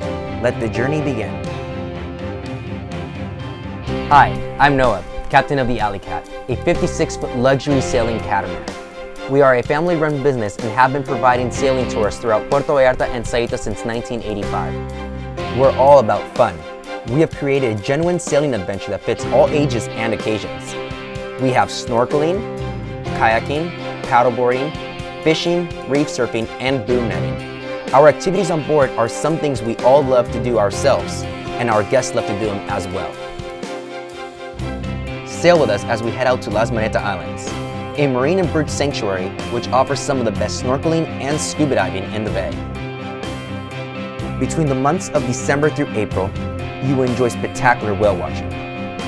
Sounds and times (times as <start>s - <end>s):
Speech: 0.0s - 1.4s, 4.1s - 8.7s, 9.3s - 14.8s, 15.5s - 20.8s, 21.4s - 22.4s, 23.1s - 33.2s, 35.3s - 42.6s, 44.4s - 48.4s
Music: 0.0s - 49.0s.